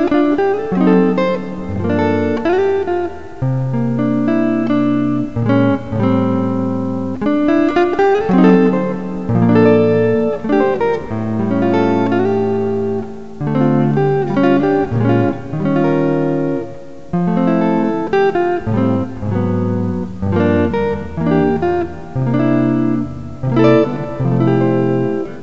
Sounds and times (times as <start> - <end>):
Electric guitar: 0.0 - 25.4.